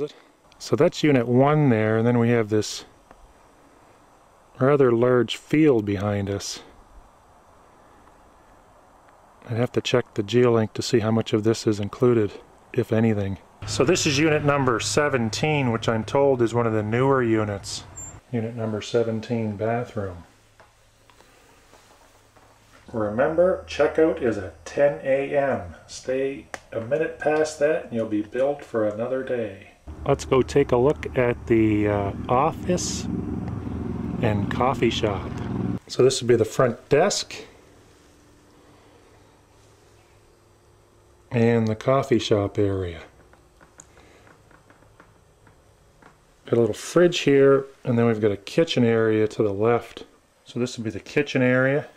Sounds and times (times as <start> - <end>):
Speech: 0.0 - 2.9, 4.6 - 6.8, 9.4 - 20.3, 22.9 - 33.1, 34.2 - 35.3, 35.9 - 37.6, 41.3 - 43.1, 46.5 - 51.9.